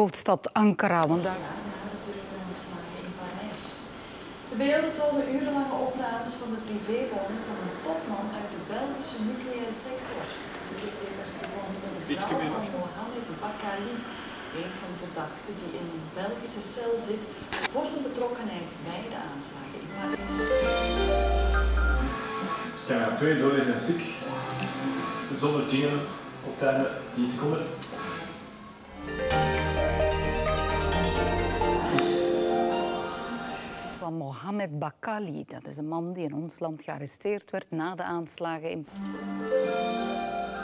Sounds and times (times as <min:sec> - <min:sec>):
Music: 0:19.9 - 0:34.0, 0:38.9 - 0:40.6.